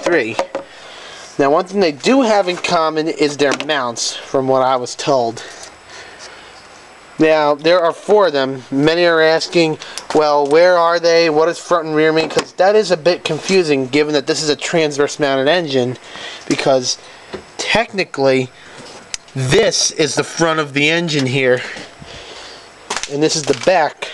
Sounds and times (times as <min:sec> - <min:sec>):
Speech: 0:00.0 - 0:00.5, 0:01.4 - 0:05.5, 0:07.2 - 0:17.0, 0:17.6 - 0:18.5, 0:19.4 - 0:21.8, 0:23.1 - 0:24.1.